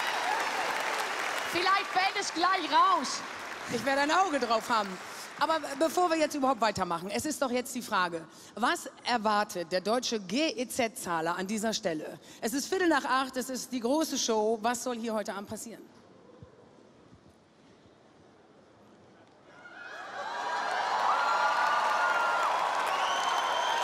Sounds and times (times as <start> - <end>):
Speech: 1.6 - 15.9.